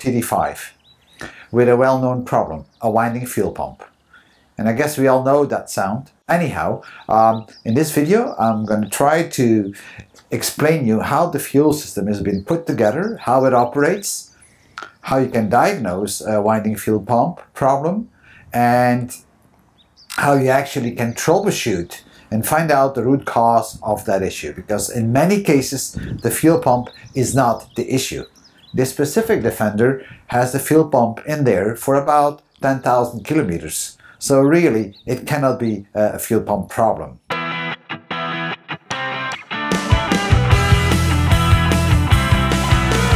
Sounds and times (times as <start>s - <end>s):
Speech: 0.0s - 0.8s, 1.5s - 3.9s, 4.6s - 14.3s, 15.0s - 19.2s, 20.1s - 37.2s.